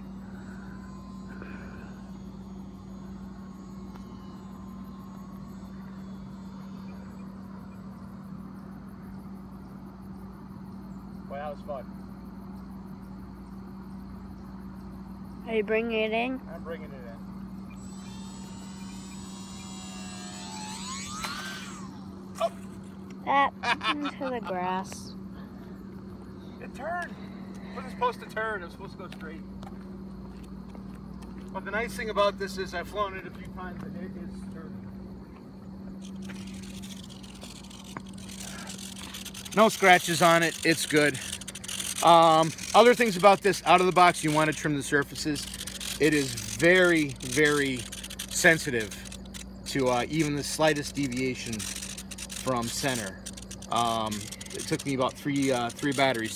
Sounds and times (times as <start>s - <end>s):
Outside, rural or natural: 0.0s - 56.3s.